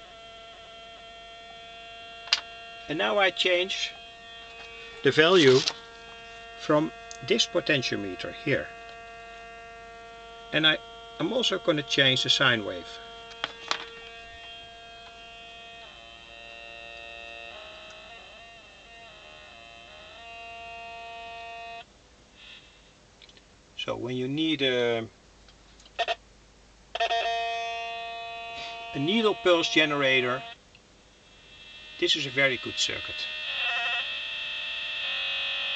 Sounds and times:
Hum: 0.0 - 35.7
Mains hum: 0.0 - 35.7.

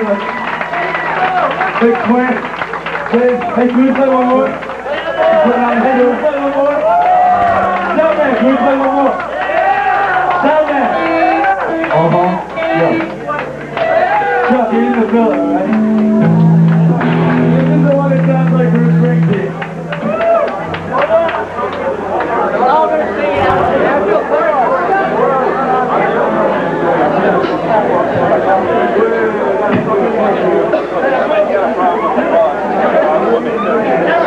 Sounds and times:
Speech: 1.7 - 2.5, 3.1 - 6.9, 7.8 - 9.3, 10.3 - 13.5, 14.4 - 15.8, 17.4 - 19.6, 20.9 - 34.2
Music: 7.2 - 8.8, 10.0 - 27.6.

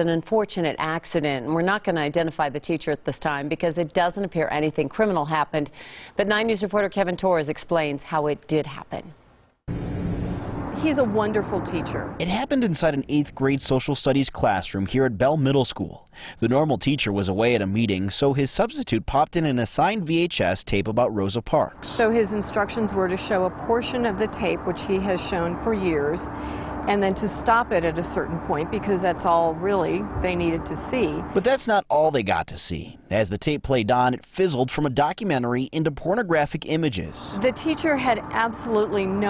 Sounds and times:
Speech: 10.8 - 26.2, 26.9 - 39.2.

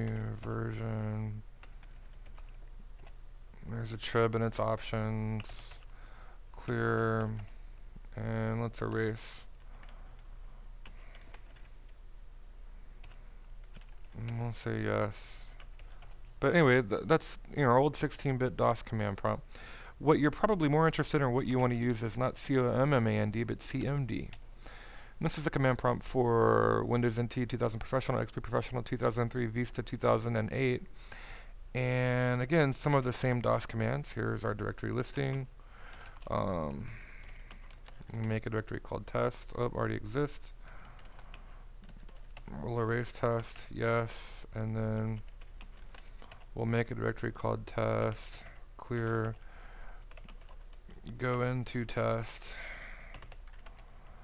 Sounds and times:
Speech: 0.0 - 1.5, 3.6 - 5.8, 6.5 - 7.5, 8.1 - 9.5, 14.2 - 15.6, 16.4 - 24.4, 25.2 - 30.9, 31.8 - 35.5, 36.3 - 37.0, 38.0 - 40.6, 42.5 - 45.2, 46.6 - 49.4, 51.0 - 52.6.

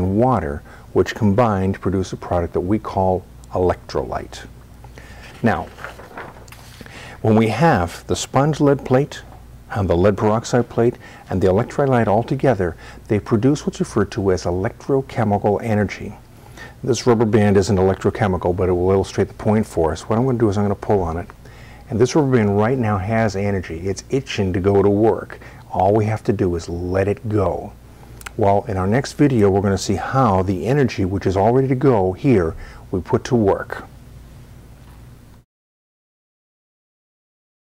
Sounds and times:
Speech: 0.0 - 4.5, 5.4 - 5.8, 7.2 - 16.2, 16.8 - 21.3, 21.9 - 33.9.

